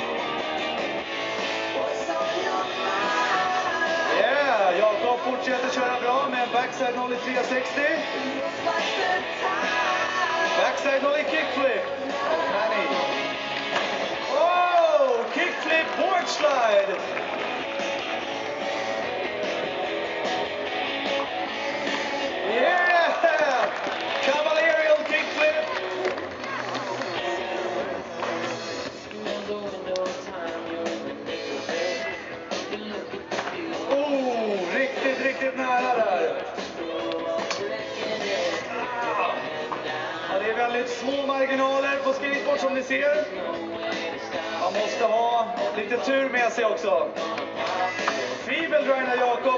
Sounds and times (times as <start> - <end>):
Music: 0.0 - 49.5.